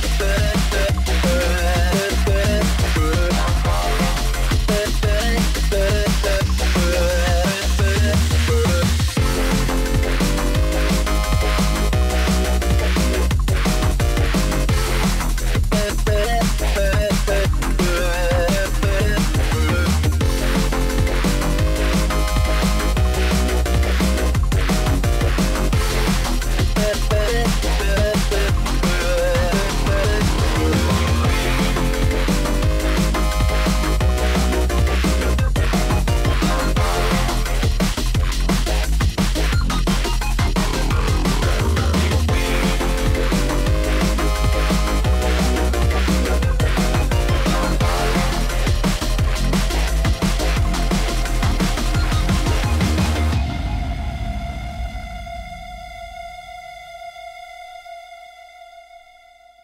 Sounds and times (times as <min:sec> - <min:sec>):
Music: 0:00.0 - 0:59.6.